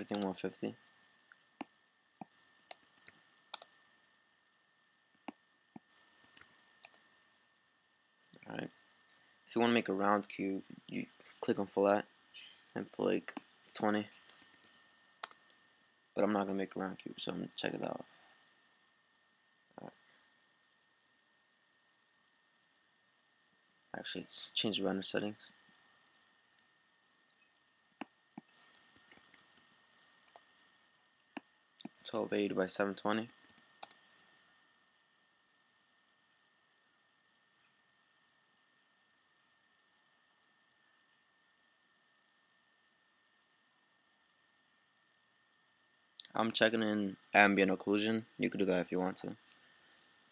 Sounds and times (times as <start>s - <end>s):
Speech: 0.0s - 0.8s, 8.4s - 8.8s, 9.5s - 12.1s, 12.8s - 14.2s, 16.2s - 18.1s, 19.8s - 20.0s, 23.9s - 25.5s, 31.9s - 33.4s, 46.2s - 49.4s.